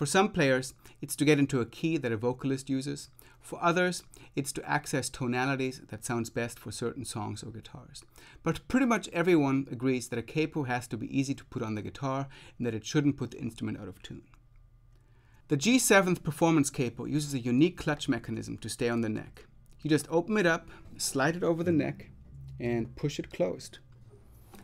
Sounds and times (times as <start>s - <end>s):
Speech: 0.0s - 14.4s, 15.5s - 23.9s.